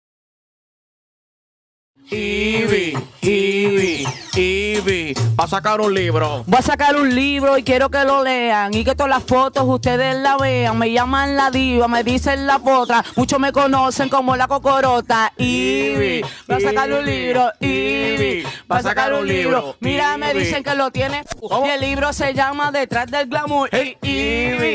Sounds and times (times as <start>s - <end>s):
Music of Latin America: 2.0s - 24.7s.